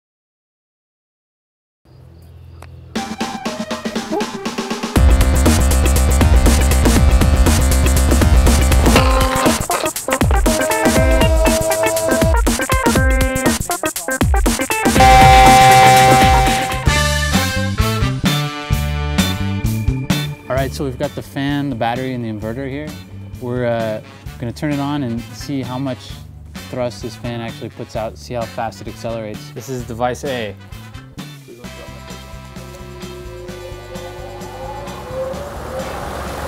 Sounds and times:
Music: 2.0 - 36.4
Speech: 20.5 - 30.6.

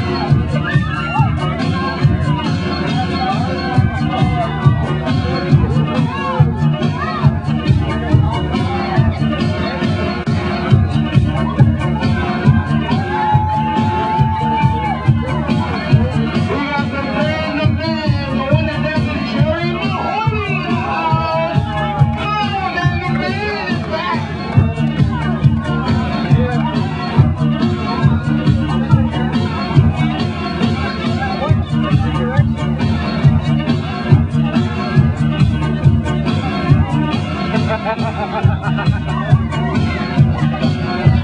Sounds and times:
Music: 0.0 - 41.2.

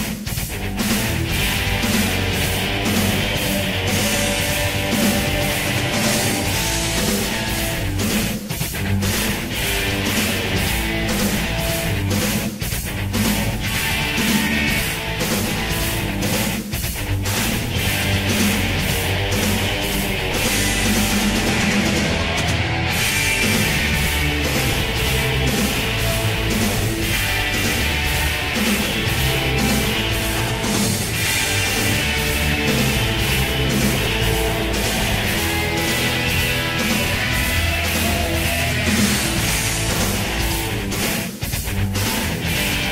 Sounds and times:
Music: 0.0 - 42.9.

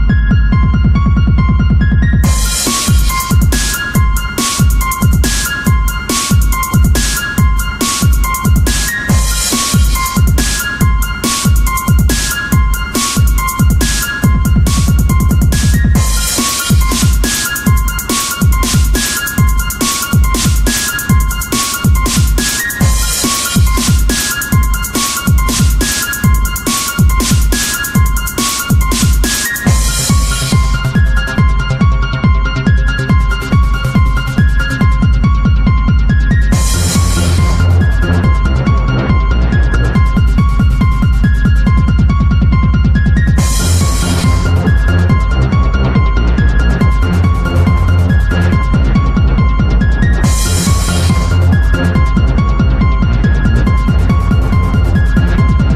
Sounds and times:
Techno: 0.0 - 55.7.

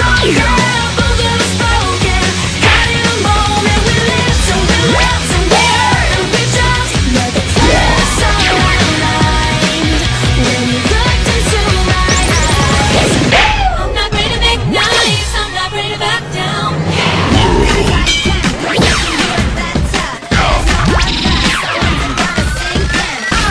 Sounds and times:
Music: 0.0 - 23.5.

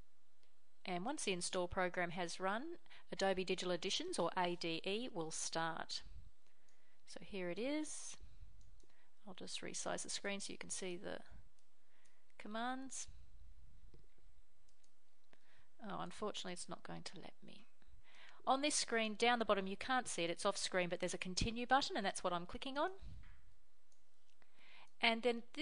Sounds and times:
Speech: 0.8 - 6.1, 7.1 - 8.2, 9.3 - 11.4, 12.4 - 13.2, 15.8 - 17.7, 18.4 - 23.1, 25.0 - 25.6.

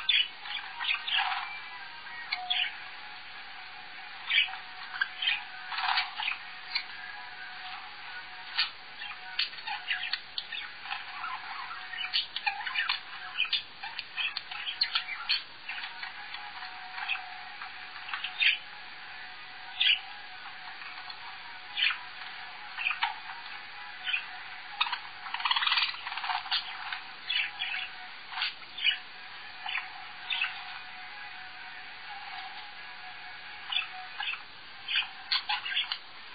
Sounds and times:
Domestic animals, pets: 0.0 - 2.8, 8.5 - 18.6, 20.7 - 29.0, 33.7 - 36.0
Bird: 0.0 - 36.1
Music: 0.0 - 36.3.

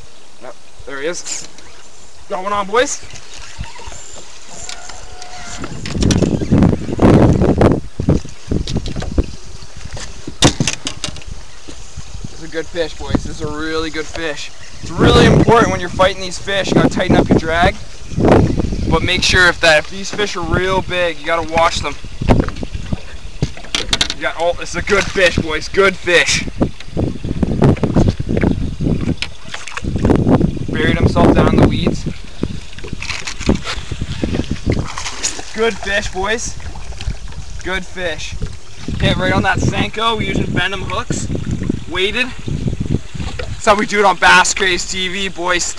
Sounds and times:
Outside, rural or natural: 0.0 - 45.7
Speech: 0.4 - 1.5, 2.3 - 3.0, 12.4 - 17.8, 18.9 - 22.0, 24.2 - 26.5, 30.7 - 32.0, 35.5 - 36.6, 37.6 - 38.4, 39.0 - 41.3, 41.9 - 42.4, 43.6 - 45.7.

